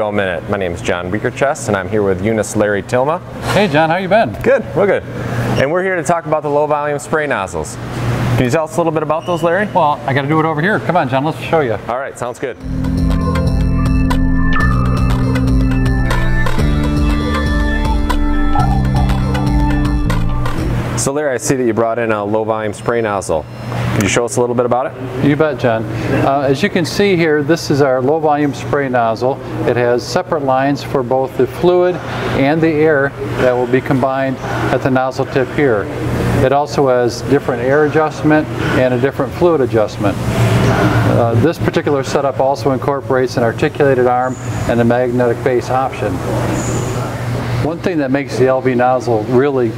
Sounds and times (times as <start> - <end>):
Speech: 0.0 - 7.8, 8.4 - 12.6, 21.0 - 23.4, 24.0 - 40.2, 41.1 - 46.2, 47.6 - 49.7.